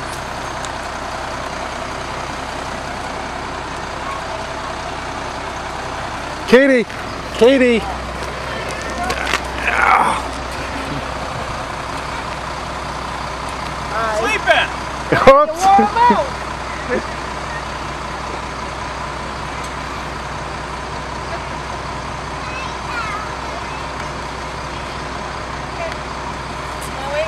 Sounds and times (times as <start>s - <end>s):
Bus: 0.0s - 27.2s.